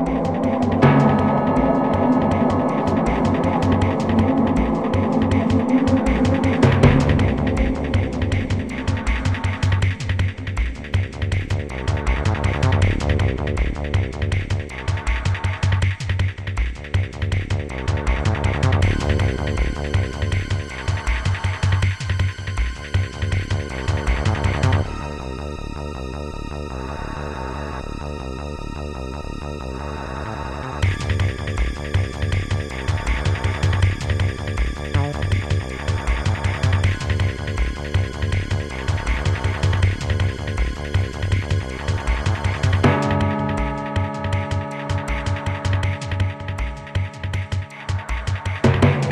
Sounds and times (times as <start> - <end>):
Music: 0.0 - 49.1.